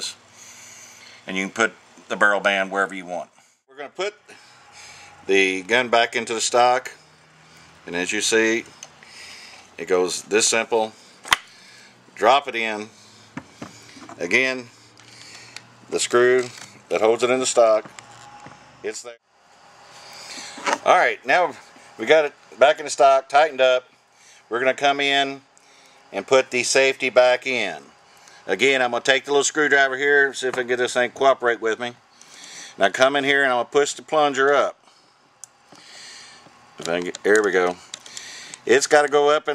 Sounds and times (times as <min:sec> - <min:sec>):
Speech: 0:01.3 - 0:04.2, 0:05.3 - 0:07.0, 0:07.9 - 0:08.7, 0:09.8 - 0:11.0, 0:12.2 - 0:12.9, 0:14.2 - 0:14.7, 0:15.9 - 0:17.9, 0:18.9 - 0:19.2, 0:20.8 - 0:23.9, 0:24.5 - 0:25.4, 0:26.2 - 0:27.9, 0:28.5 - 0:32.0, 0:32.8 - 0:34.8, 0:36.8 - 0:37.8, 0:38.7 - 0:39.5.